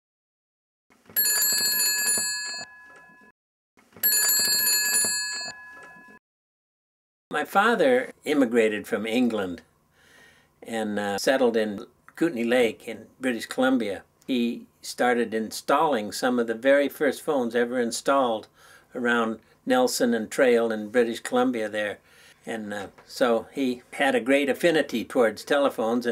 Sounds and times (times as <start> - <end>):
Telephone: 1.2 - 3.3, 4.0 - 6.2
Speech: 7.3 - 9.7, 10.6 - 26.1.